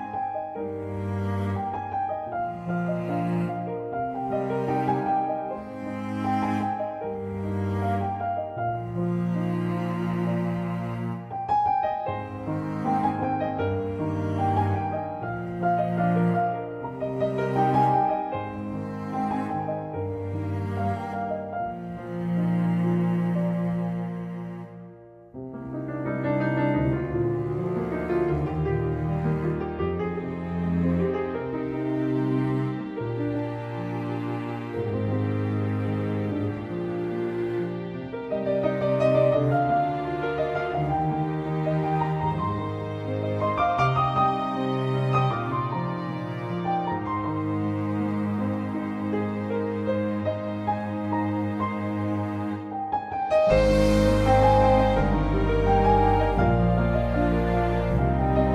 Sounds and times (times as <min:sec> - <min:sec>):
Cello: 0:00.0 - 0:58.5.